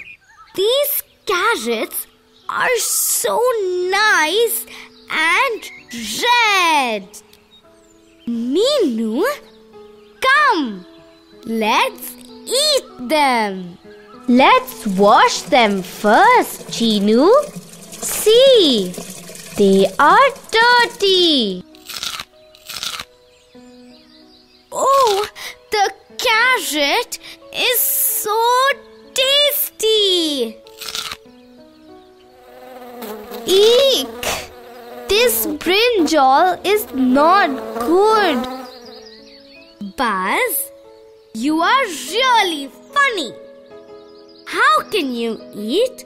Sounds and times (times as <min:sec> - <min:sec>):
Music: 0:00.0 - 0:46.0
Speech: 0:00.6 - 0:07.2, 0:08.3 - 0:09.4, 0:11.4 - 0:21.6, 0:24.8 - 0:30.6, 0:33.5 - 0:34.1, 0:35.1 - 0:38.5, 0:39.8 - 0:40.7, 0:41.4 - 0:43.4, 0:44.5 - 0:46.0.